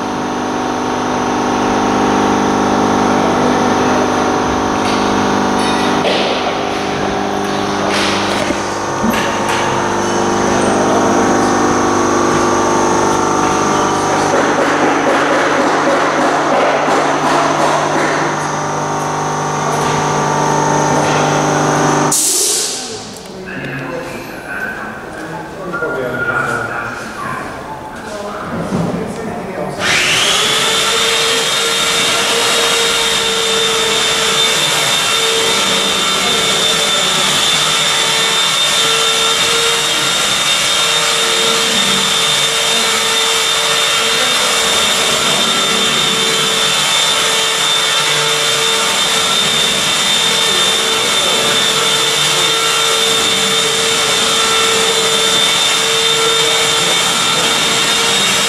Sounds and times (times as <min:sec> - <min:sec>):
Speech: 0:22.8 - 0:29.8, 0:35.5 - 0:37.8, 0:50.3 - 0:53.4.